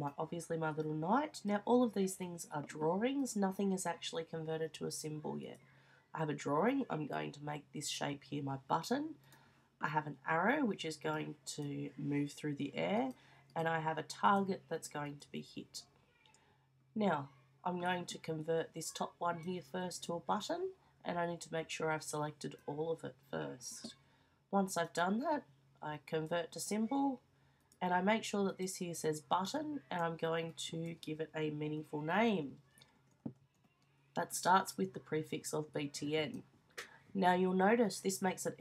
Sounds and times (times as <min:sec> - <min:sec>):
Speech: 0:00.0 - 0:05.6, 0:06.2 - 0:09.2, 0:09.8 - 0:15.9, 0:17.0 - 0:24.0, 0:24.6 - 0:27.2, 0:27.8 - 0:32.6, 0:34.2 - 0:36.4, 0:37.2 - 0:38.6.